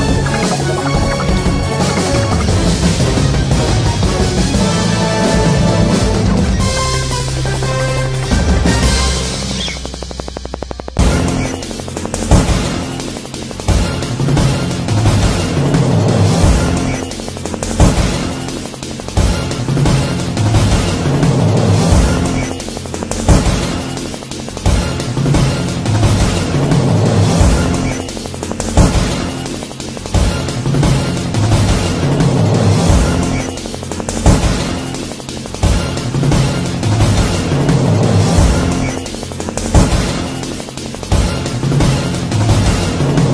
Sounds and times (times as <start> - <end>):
Soundtrack music: 0.0 - 43.3.